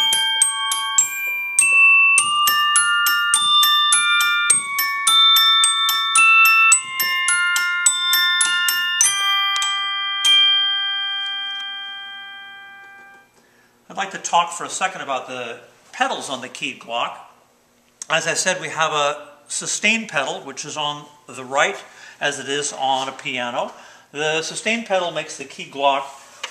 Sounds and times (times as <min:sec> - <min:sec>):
Piano: 0:00.0 - 0:13.3
Glockenspiel: 0:00.0 - 0:13.4.